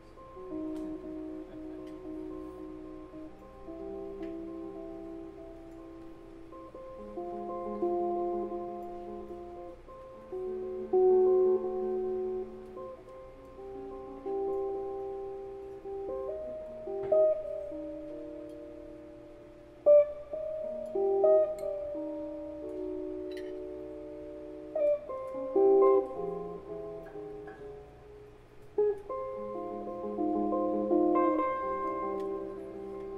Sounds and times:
Guitar: 0:00.0 - 0:33.1
Inside, large room or hall: 0:00.0 - 0:33.1.

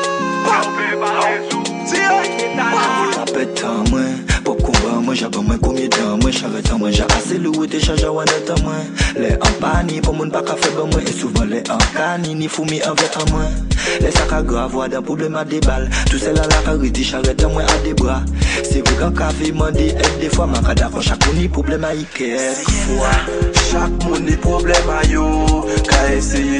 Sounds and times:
Music: 0:00.0 - 0:26.5.

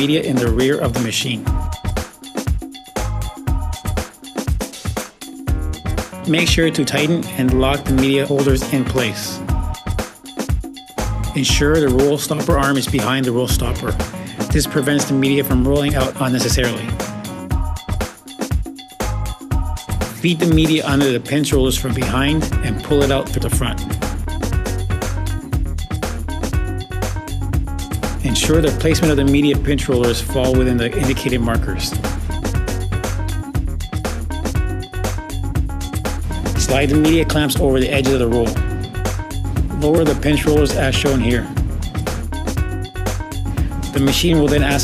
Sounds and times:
Speech: 0:00.0 - 0:01.5, 0:06.3 - 0:09.5, 0:11.4 - 0:17.0, 0:20.2 - 0:23.9, 0:28.2 - 0:32.0, 0:36.6 - 0:38.6, 0:39.8 - 0:41.5, 0:43.9 - 0:44.8
Music: 0:00.0 - 0:44.8.

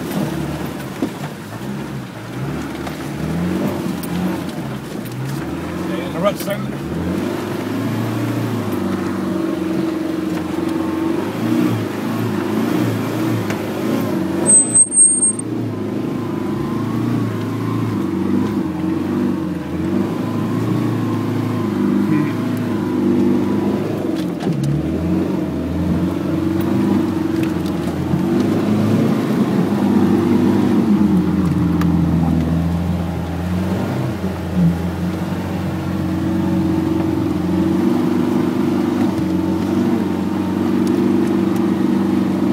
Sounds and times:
Car: 0:00.0 - 0:42.5.

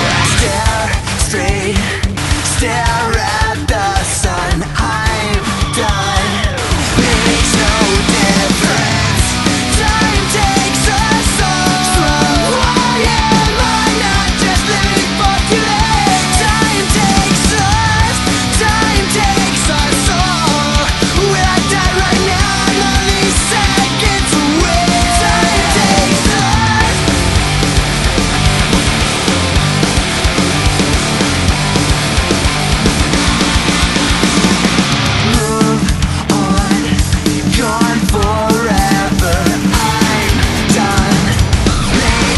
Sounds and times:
Vocal music: 0:00.0 - 0:42.3.

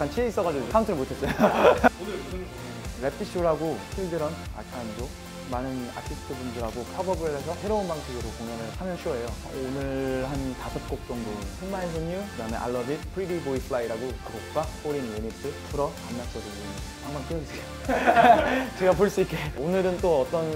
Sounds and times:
Speech: 0:00.0 - 0:01.3, 0:01.9 - 0:17.6, 0:18.7 - 0:20.5
Music: 0:00.0 - 0:20.5.

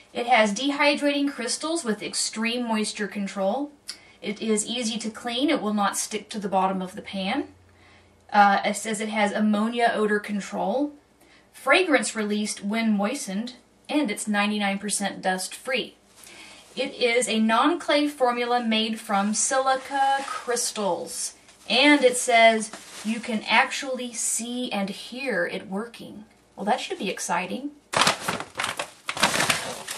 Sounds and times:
Speech: 0:00.0 - 0:07.6, 0:08.3 - 0:11.0, 0:11.6 - 0:16.0, 0:16.8 - 0:27.8.

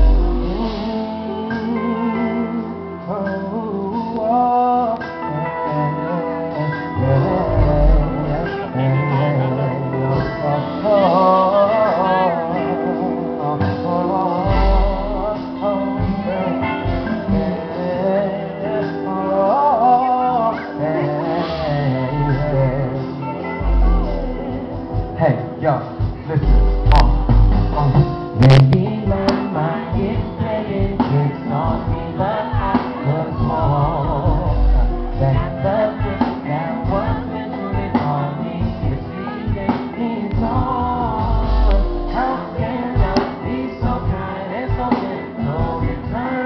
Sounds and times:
Music: 0:00.0 - 0:46.4
Singing: 0:00.0 - 0:46.4.

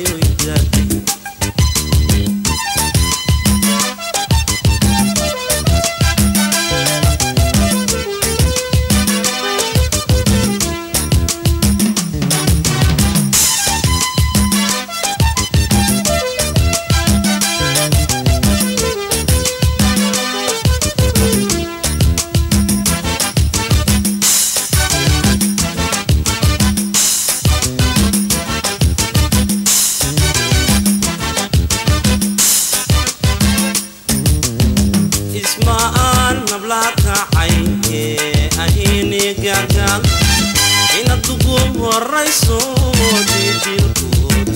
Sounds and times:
Music of Africa: 0:00.0 - 0:44.5.

